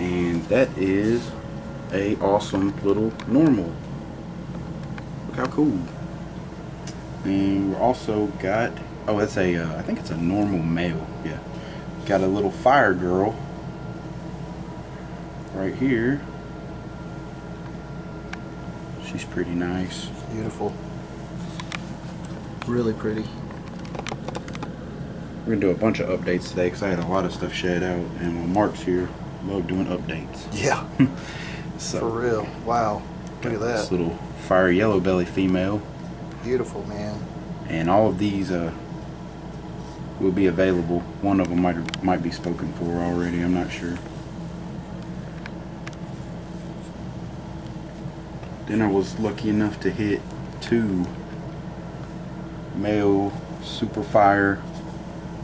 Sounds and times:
Speech: 0:00.0 - 0:03.8, 0:05.3 - 0:06.0, 0:07.2 - 0:11.4, 0:12.0 - 0:13.4, 0:15.5 - 0:16.3, 0:19.0 - 0:20.8, 0:22.6 - 0:23.4, 0:25.5 - 0:31.0, 0:31.7 - 0:38.8, 0:40.2 - 0:44.0, 0:48.6 - 0:51.2, 0:52.7 - 0:54.7
Inside, small room: 0:00.0 - 0:55.4.

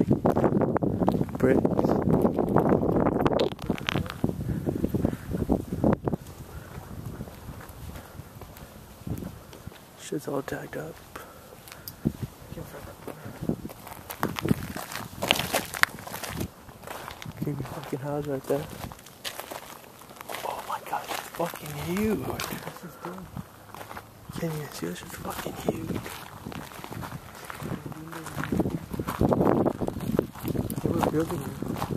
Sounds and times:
Walk, footsteps: 0:06.1 - 0:09.9, 0:11.0 - 0:22.8, 0:23.7 - 0:24.5, 0:25.3 - 0:31.9
Speech: 0:10.0 - 0:11.0, 0:12.5 - 0:13.4, 0:17.4 - 0:18.7, 0:20.4 - 0:23.3, 0:24.3 - 0:26.1, 0:27.7 - 0:28.5, 0:30.8 - 0:31.6.

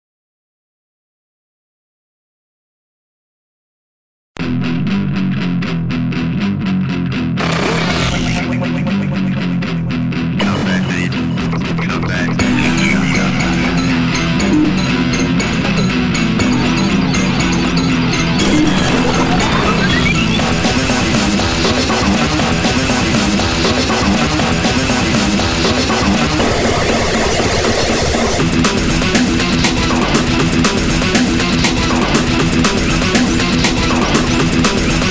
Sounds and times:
Music: 0:04.4 - 0:35.1.

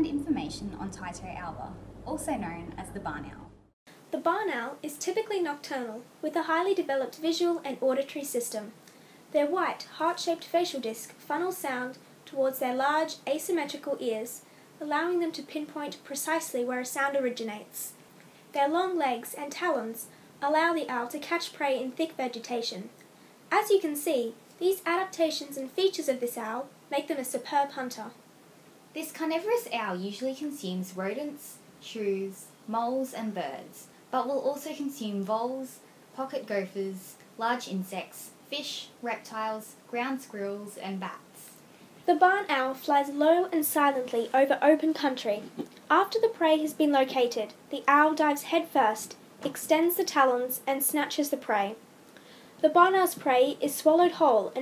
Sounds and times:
Speech: 0:00.0 - 0:03.5, 0:04.1 - 0:28.2, 0:29.0 - 0:51.8, 0:52.6 - 0:54.6.

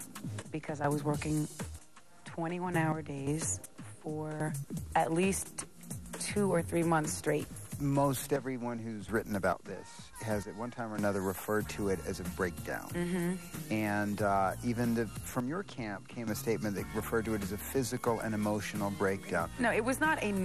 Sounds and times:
Music: 0:00.0 - 0:20.4.

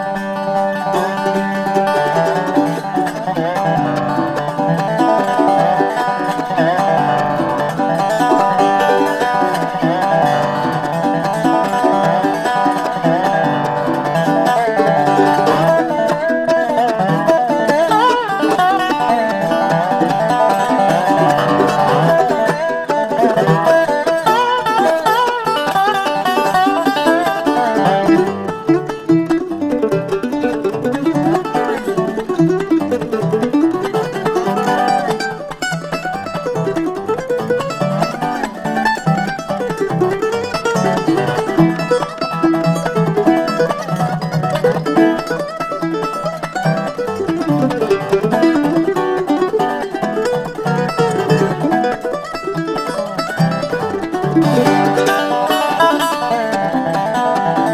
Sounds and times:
Mandolin: 0:00.0 - 0:57.7.

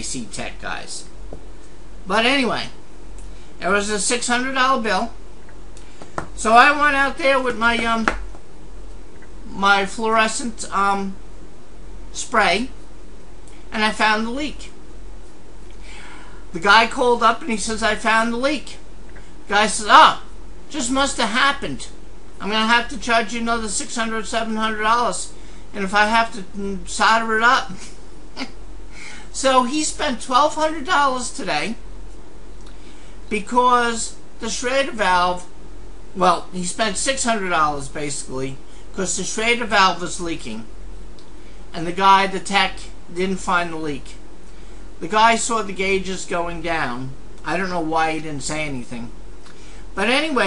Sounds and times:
Speech: 0:00.0 - 0:01.1, 0:02.1 - 0:02.8, 0:03.6 - 0:05.2, 0:06.4 - 0:08.2, 0:09.5 - 0:11.2, 0:12.1 - 0:12.8, 0:13.7 - 0:14.8, 0:16.5 - 0:18.8, 0:19.5 - 0:27.8, 0:29.3 - 0:31.8, 0:33.3 - 0:35.5, 0:36.2 - 0:40.7, 0:41.7 - 0:44.2, 0:45.0 - 0:49.2, 0:50.0 - 0:50.4.

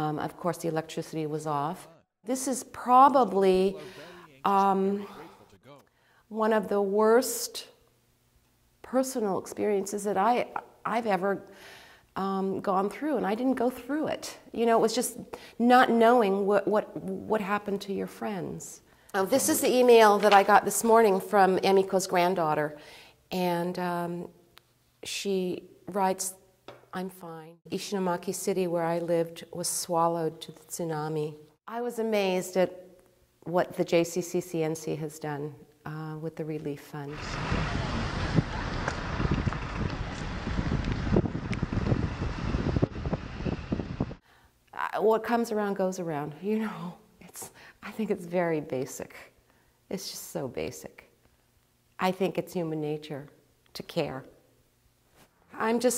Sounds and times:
Wind noise (microphone): 0:37.1 - 0:44.2.

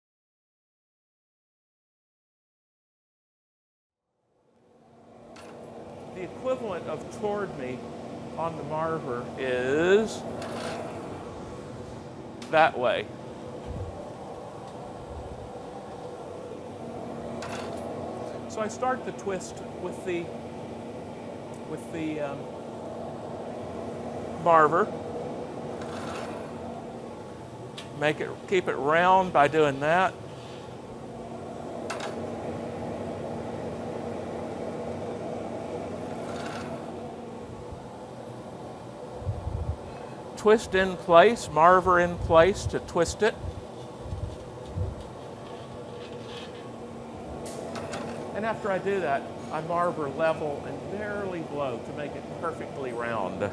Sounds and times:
Speech: 0:06.2 - 0:07.8, 0:08.4 - 0:10.2, 0:12.5 - 0:13.1, 0:18.4 - 0:20.3, 0:21.7 - 0:22.4, 0:24.4 - 0:24.9, 0:28.0 - 0:30.2, 0:40.4 - 0:43.4, 0:48.3 - 0:53.5.

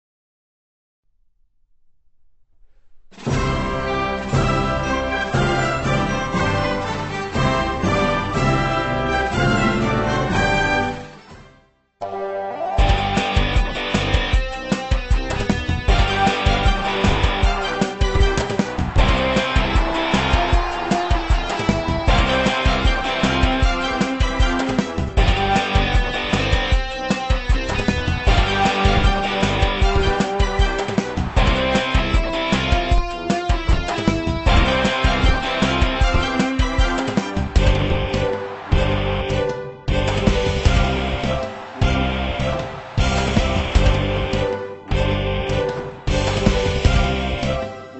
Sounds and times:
Music: 0:02.7 - 0:47.9.

